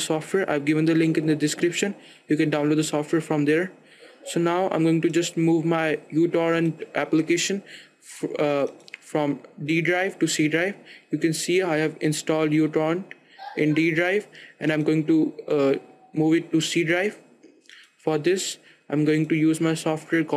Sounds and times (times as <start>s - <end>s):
Speech: 0.0s - 17.2s, 18.0s - 20.3s.